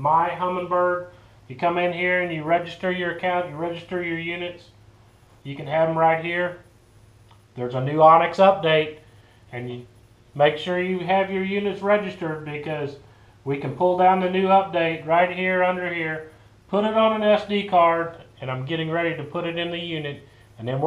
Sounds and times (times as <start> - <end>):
Speech: 0.0 - 4.8, 5.4 - 6.6, 7.6 - 20.8.